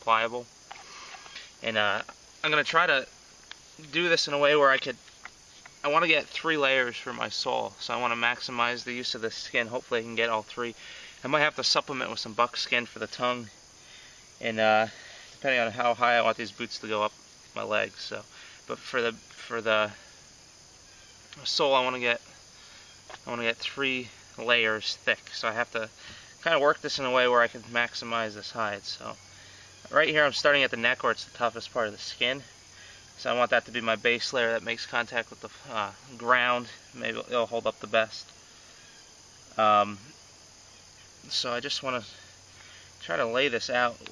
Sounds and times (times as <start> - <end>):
Speech: 0.0 - 0.5, 1.6 - 3.1, 3.8 - 5.0, 5.8 - 13.6, 14.4 - 20.0, 21.4 - 22.3, 23.2 - 29.2, 29.9 - 32.5, 33.2 - 38.3, 39.6 - 40.1, 41.3 - 42.3, 43.0 - 44.1.